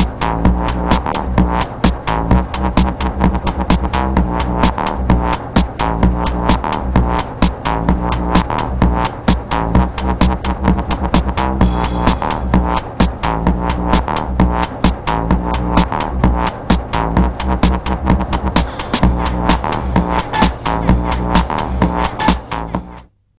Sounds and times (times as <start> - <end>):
Techno: 0.0 - 23.1.